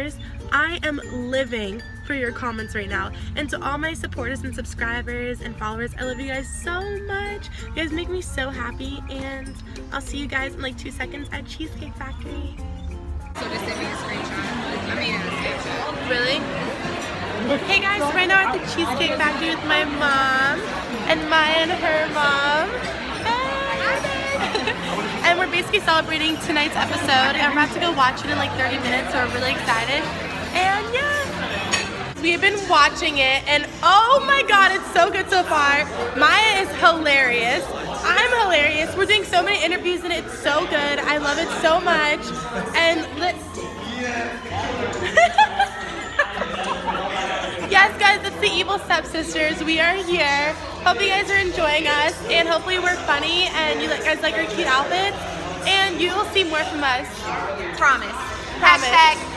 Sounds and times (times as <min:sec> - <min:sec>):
Music: 0:00.0 - 0:59.3.